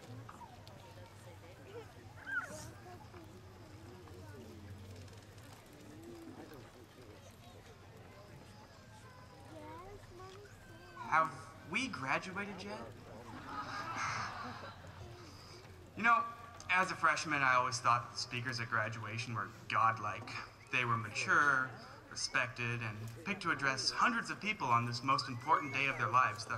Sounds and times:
Male speech, man speaking: 11.0 - 13.3, 16.0 - 26.5
Narration, monologue: 11.0 - 13.6, 15.4 - 26.5.

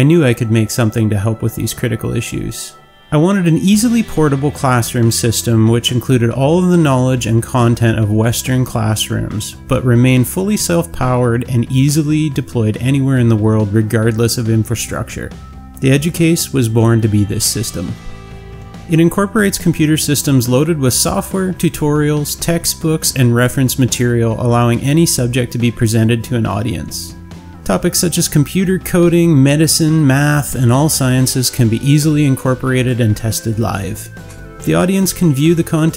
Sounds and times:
Speech: 0.0 - 18.0, 18.9 - 35.9
Music: 0.0 - 35.9.

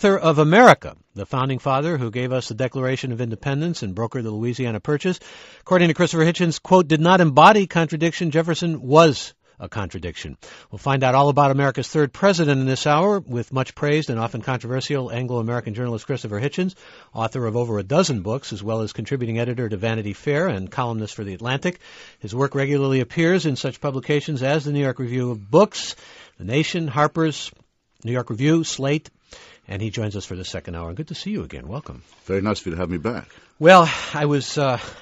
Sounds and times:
Speech: 0.0 - 29.1, 29.7 - 35.0.

